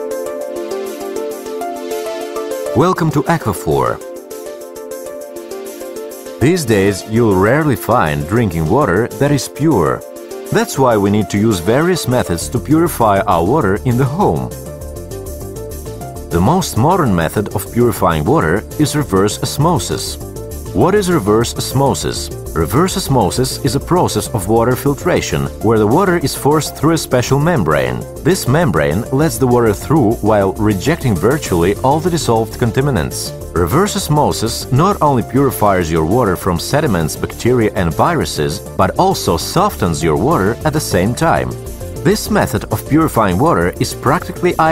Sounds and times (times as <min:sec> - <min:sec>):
Music: 0:00.0 - 0:44.7
Speech: 0:02.8 - 0:04.0, 0:06.4 - 0:14.6, 0:16.3 - 0:20.2, 0:20.8 - 0:44.7.